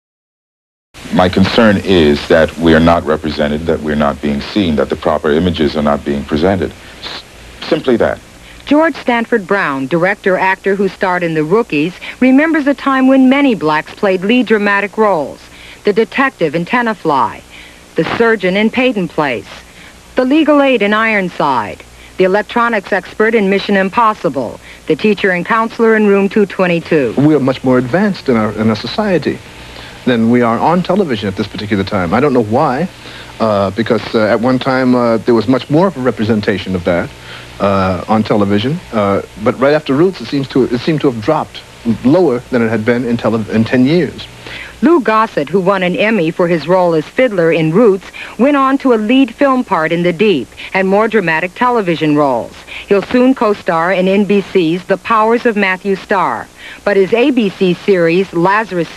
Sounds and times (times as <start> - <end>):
Speech: 1.0 - 19.6, 20.2 - 29.4, 30.0 - 58.9.